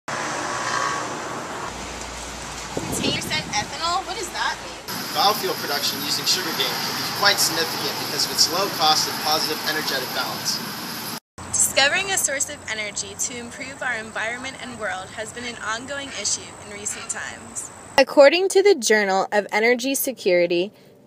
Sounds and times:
Outside, urban or manmade: 0.1 - 21.0
Speech: 3.0 - 10.6, 11.6 - 20.7.

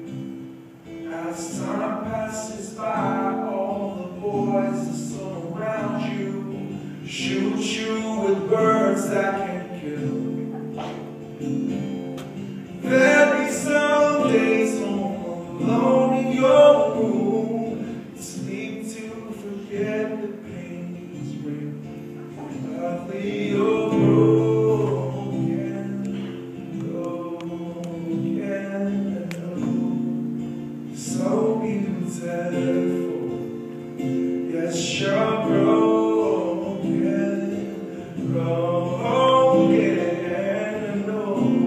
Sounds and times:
Music: 0.0 - 41.6.

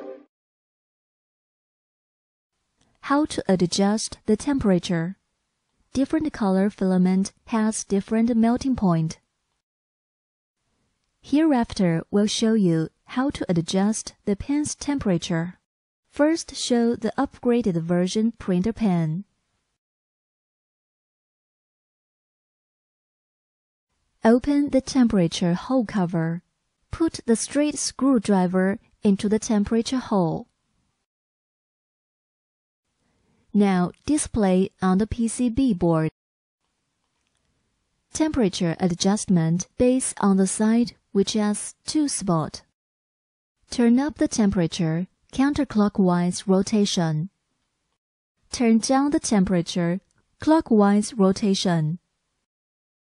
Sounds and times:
Speech: 3.1 - 5.2, 6.0 - 9.2, 11.3 - 15.6, 16.2 - 19.3, 24.3 - 26.4, 27.0 - 30.5, 33.6 - 36.2, 38.2 - 42.7, 43.7 - 47.3, 48.5 - 52.0.

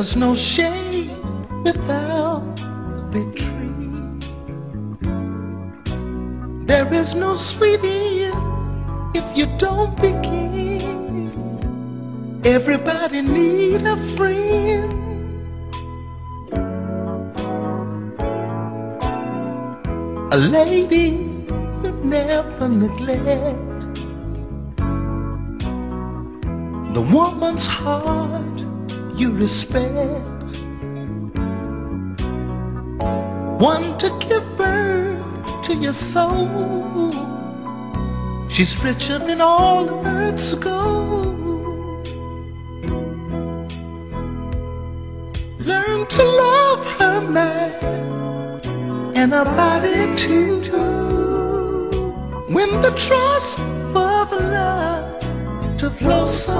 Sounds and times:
Soul music: 0.0 - 56.5.

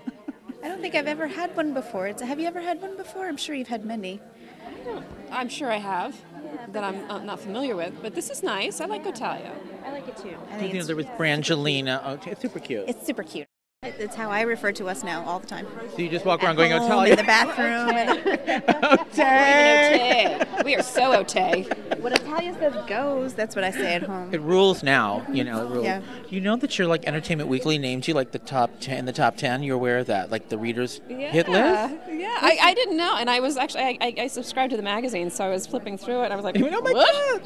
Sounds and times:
Female speech, woman speaking: 0.6 - 4.2, 5.3 - 11.0, 12.9 - 15.7, 16.4 - 18.2, 18.9 - 24.3, 25.8 - 26.0, 31.1 - 37.4.

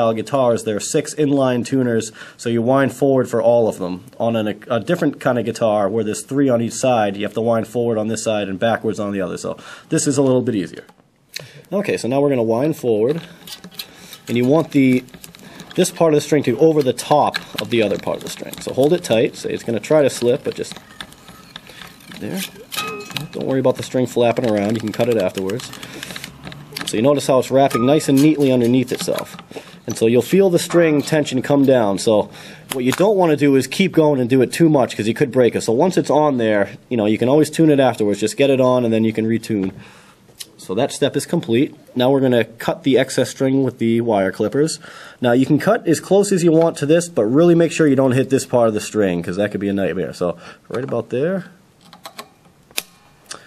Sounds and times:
Speech: 0.0 - 11.0, 11.7 - 13.3, 14.3 - 15.1, 15.8 - 20.8, 22.2 - 25.8, 26.8 - 39.8, 40.6 - 51.6.

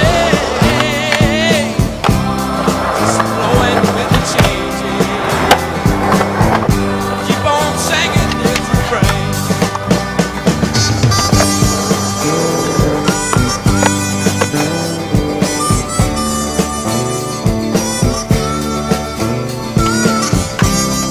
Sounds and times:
Music: 0.0 - 21.1
Skateboard: 0.0 - 21.1.

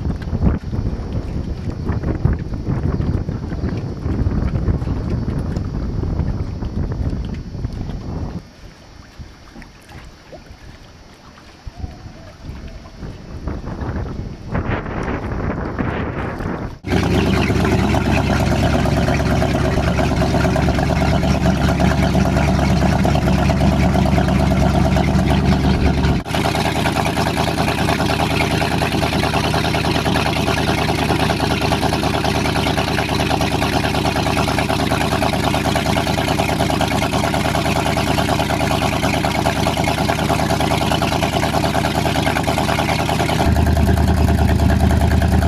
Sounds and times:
Motorboat, speedboat: 0.0 - 45.4.

